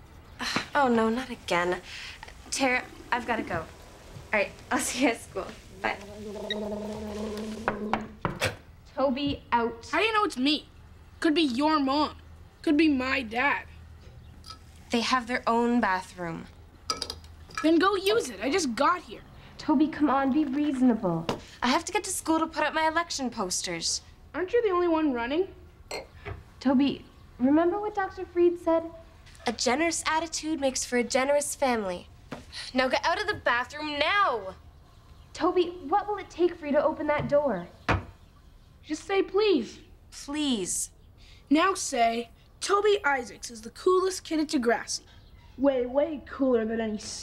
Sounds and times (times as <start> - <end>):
Speech: 2.5 - 3.7, 4.3 - 6.1, 8.9 - 13.7, 17.6 - 25.6, 26.6 - 32.1, 32.7 - 34.6, 35.4 - 37.8, 41.5 - 47.2.